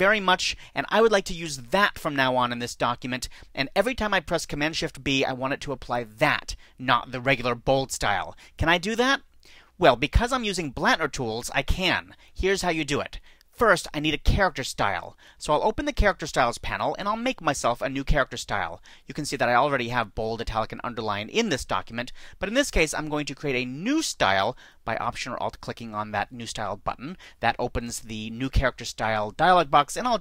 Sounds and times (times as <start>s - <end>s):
Speech: 0.0s - 30.2s.